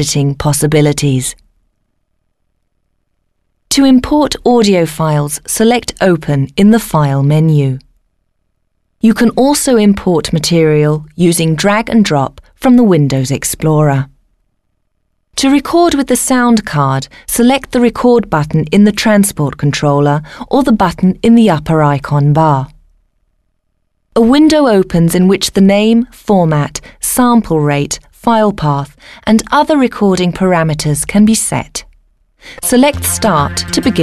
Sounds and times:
Speech: 0.0 - 1.4, 3.7 - 7.9, 9.0 - 14.2, 15.4 - 22.8, 24.2 - 31.9, 32.6 - 34.0.

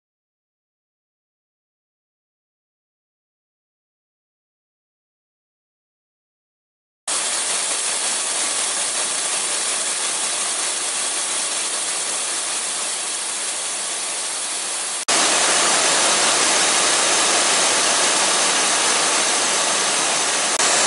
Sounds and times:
Steam: 7.1 - 20.8.

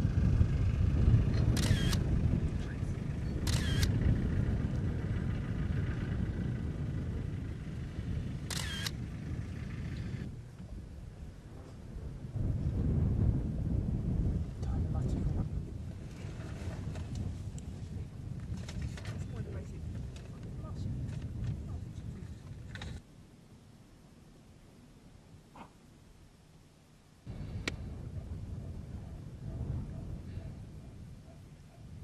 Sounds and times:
Speech: 14.6 - 15.3, 19.0 - 21.0, 21.6 - 22.4.

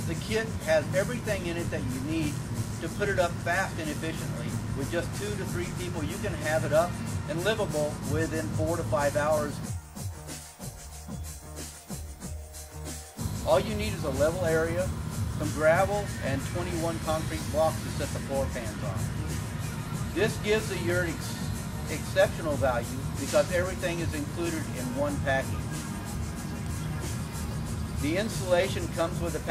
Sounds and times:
Speech: 0.0 - 9.6, 13.5 - 19.0, 20.2 - 25.6, 28.0 - 29.5
Music: 0.0 - 29.5.

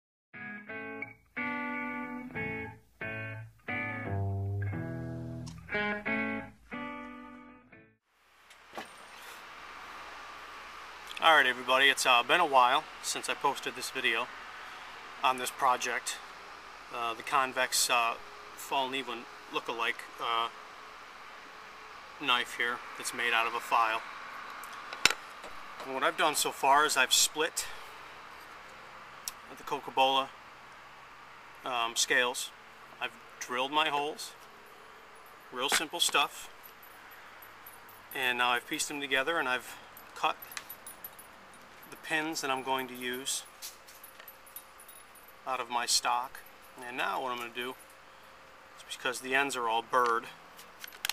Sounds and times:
Speech: 11.1 - 14.3, 15.2 - 16.2, 16.9 - 20.5, 22.2 - 24.0, 25.8 - 27.8, 29.5 - 30.4, 31.6 - 34.4, 35.5 - 36.5, 38.2 - 40.4, 41.9 - 43.5, 45.5 - 47.8, 48.8 - 50.4.

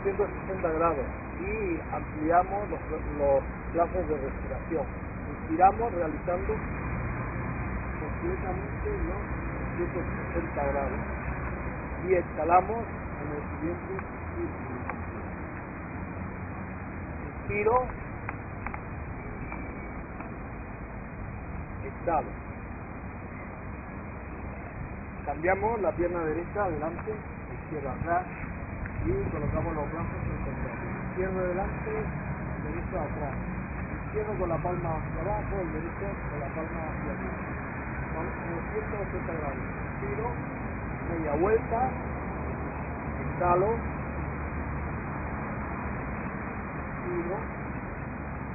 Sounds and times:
Speech: 0.0 - 6.6, 8.0 - 11.1, 12.0 - 15.1, 17.2 - 18.0, 21.8 - 22.4, 25.3 - 28.4, 29.0 - 37.5, 38.1 - 40.4, 41.0 - 42.0, 43.2 - 43.9, 47.0 - 47.6.

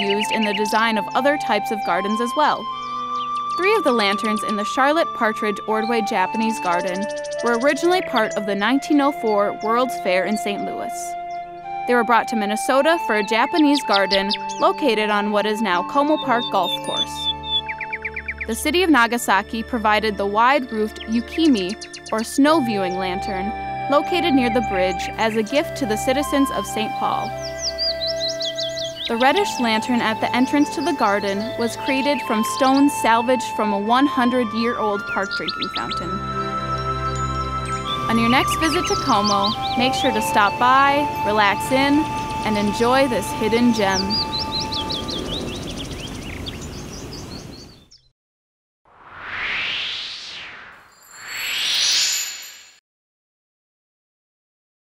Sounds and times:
Bird vocalization, bird call, bird song: 0.0 - 5.1, 5.7 - 11.8, 12.7 - 18.9, 20.0 - 23.5, 26.0 - 33.8, 34.4 - 36.2, 37.2 - 48.1.

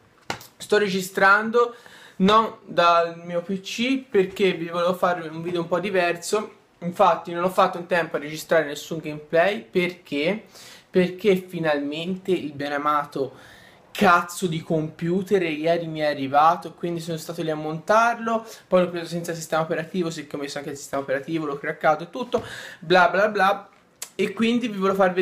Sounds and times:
Speech: 0.6 - 13.4, 14.0 - 25.2.

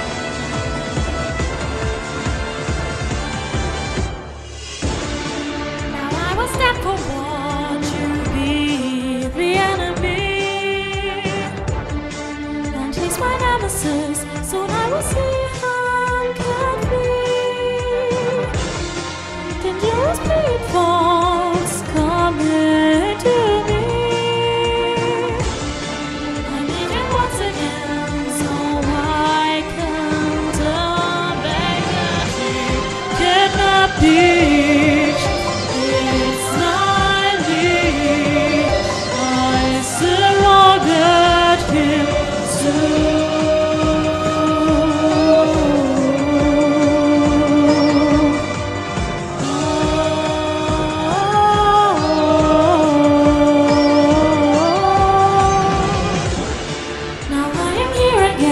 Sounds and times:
Music: 0.0 - 58.5
Female singing: 5.9 - 11.6, 12.7 - 18.5, 19.6 - 25.5, 26.5 - 48.6, 49.4 - 56.2, 57.3 - 58.5.

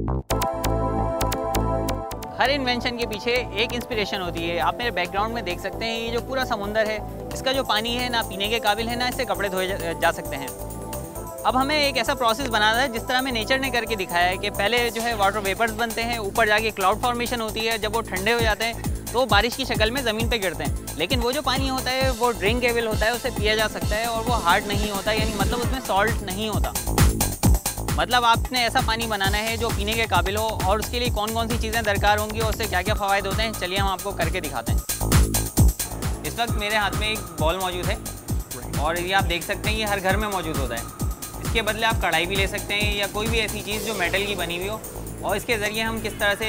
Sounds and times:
Music: 0.0 - 46.4
Speech: 2.4 - 10.5, 11.5 - 26.8, 28.0 - 34.8, 36.2 - 38.0, 38.6 - 40.9, 41.5 - 46.4.

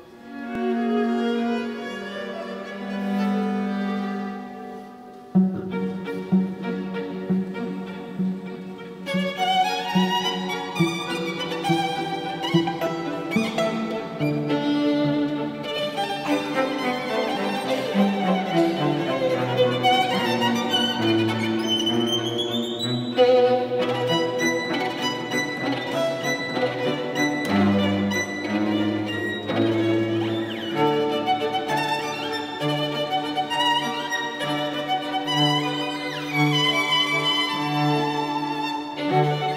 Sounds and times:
Violin, fiddle: 0.0 - 39.5.

